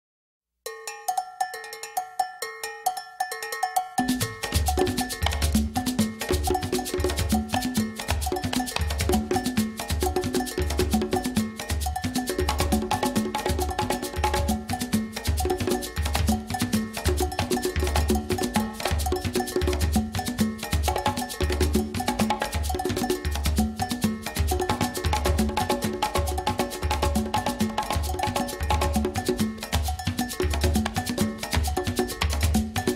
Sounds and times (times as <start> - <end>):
Wood block: 0.8 - 32.9
Drum: 4.0 - 32.9.